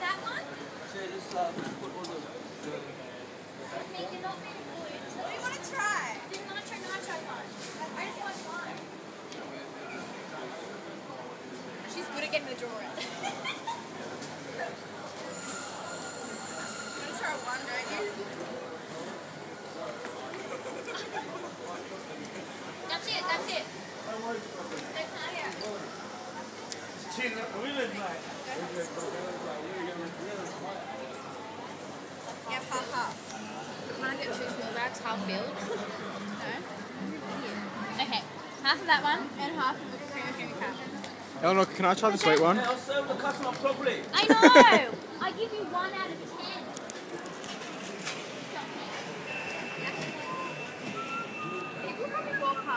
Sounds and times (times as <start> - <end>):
Inside, public space: 0.0 - 52.7.